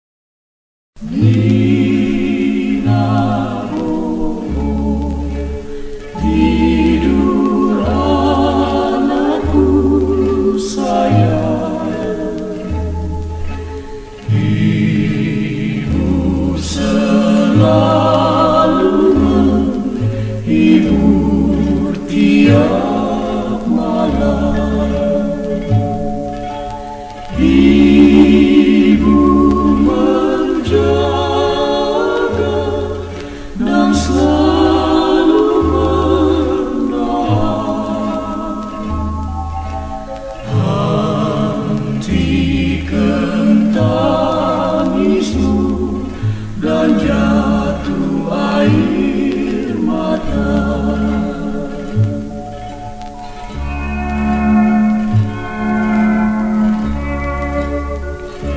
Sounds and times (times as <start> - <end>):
Music: 1.0 - 58.5.